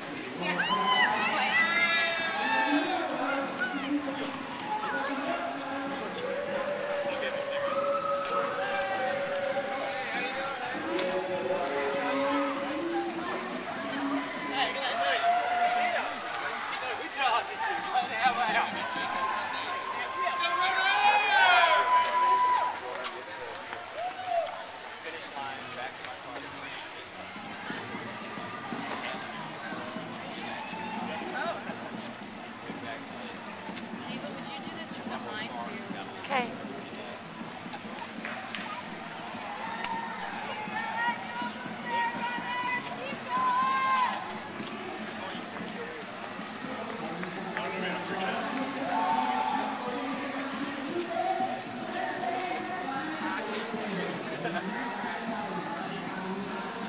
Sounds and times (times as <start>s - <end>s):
Run: 0.0s - 56.8s.